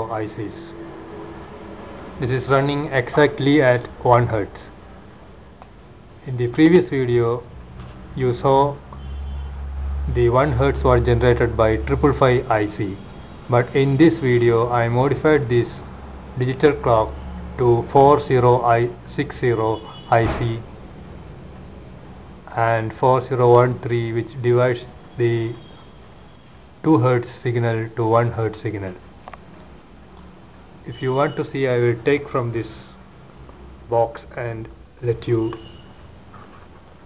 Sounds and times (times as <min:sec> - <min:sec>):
Speech: 0:00.0 - 0:00.8, 0:02.2 - 0:04.8, 0:06.2 - 0:07.5, 0:08.2 - 0:08.8, 0:10.1 - 0:20.7, 0:22.5 - 0:25.6, 0:26.8 - 0:29.0, 0:30.9 - 0:33.0, 0:33.9 - 0:35.6.